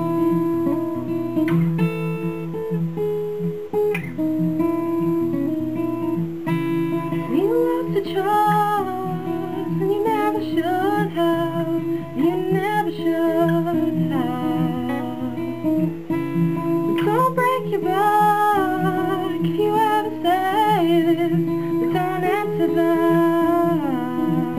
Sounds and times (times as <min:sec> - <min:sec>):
Acoustic guitar: 0:00.0 - 0:24.5
Strum: 0:00.0 - 0:24.5.